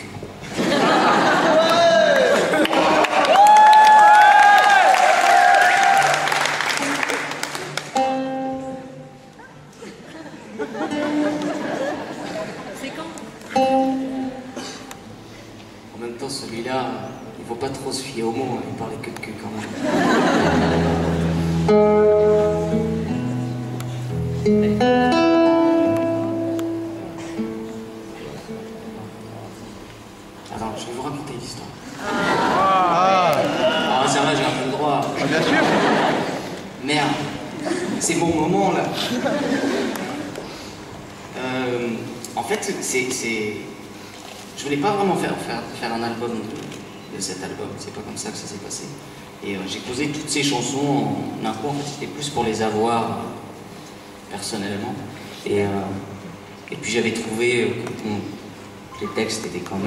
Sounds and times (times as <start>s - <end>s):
Music: 5.5s - 12.2s, 13.2s - 16.0s, 20.5s - 30.0s
Male speech, man speaking: 16.0s - 19.7s, 30.5s - 31.8s, 32.8s - 35.5s, 36.8s - 37.4s, 38.0s - 39.1s, 41.4s - 43.7s, 44.6s - 53.4s, 54.3s - 56.1s, 56.7s - 58.4s, 59.0s - 59.8s.